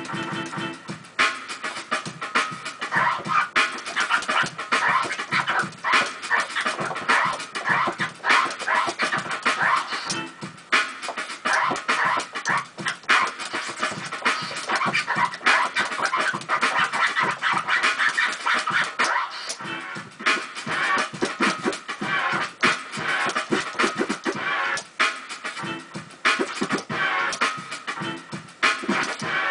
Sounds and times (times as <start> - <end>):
Electronic music: 0.0 - 29.5
Scratching (performance technique): 0.0 - 29.5.